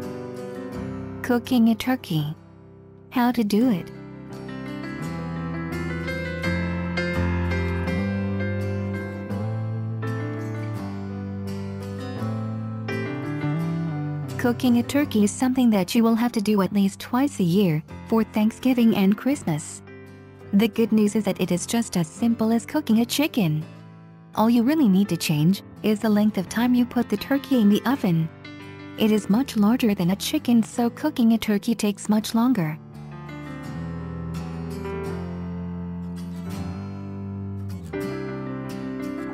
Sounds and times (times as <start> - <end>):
Music: 0.0 - 39.3
Speech: 1.2 - 2.4, 3.2 - 3.9, 14.4 - 19.8, 20.6 - 23.7, 24.4 - 28.3, 29.0 - 32.8.